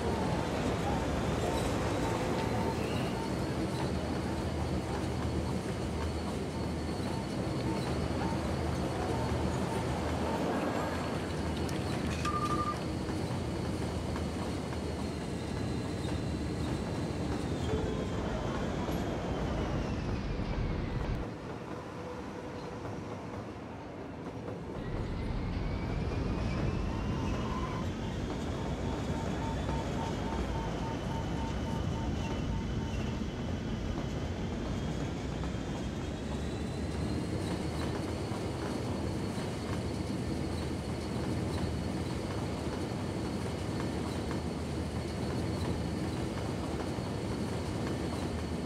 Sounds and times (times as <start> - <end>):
Train: 0.0 - 48.6.